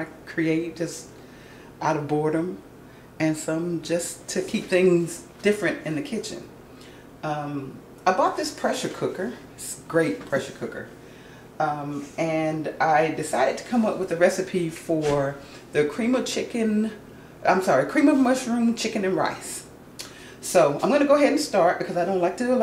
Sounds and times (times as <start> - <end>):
Speech: 0.0 - 1.1, 1.8 - 2.6, 3.2 - 6.5, 7.2 - 11.0, 11.6 - 19.7, 20.4 - 22.6.